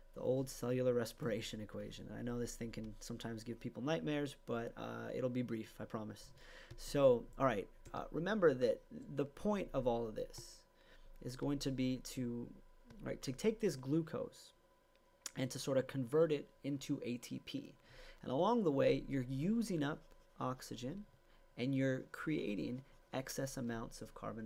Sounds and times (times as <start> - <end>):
Speech: 0.2 - 14.6, 15.3 - 24.4.